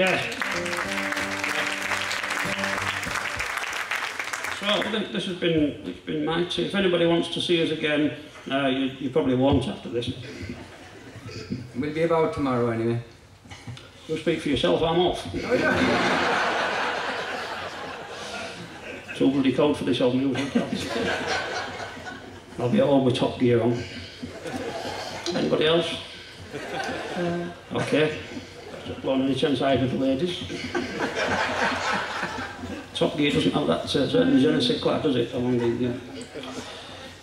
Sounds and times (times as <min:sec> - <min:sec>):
Speech: 0:04.6 - 0:10.2, 0:14.1 - 0:15.7, 0:19.2 - 0:20.8, 0:22.6 - 0:23.9, 0:28.8 - 0:30.5, 0:33.0 - 0:36.0.